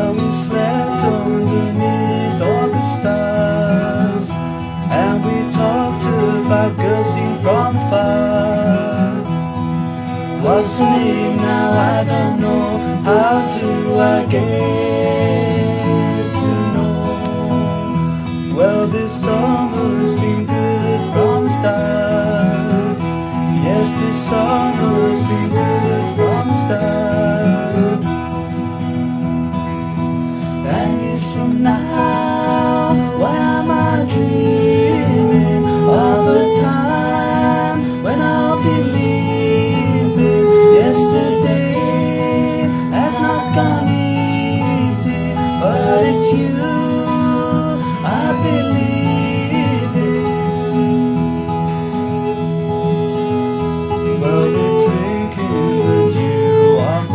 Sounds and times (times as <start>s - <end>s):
Christmas music: 0.0s - 57.1s
Country: 0.0s - 57.1s.